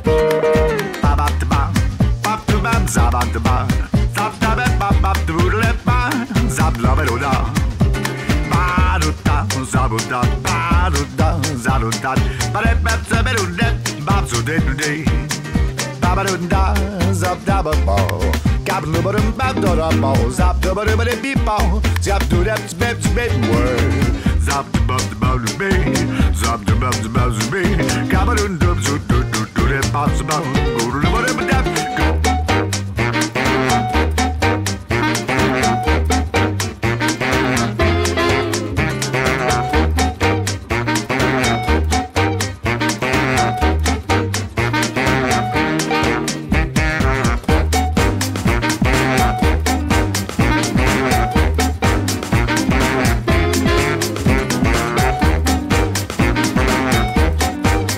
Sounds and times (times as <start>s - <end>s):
Swing music: 0.0s - 57.9s.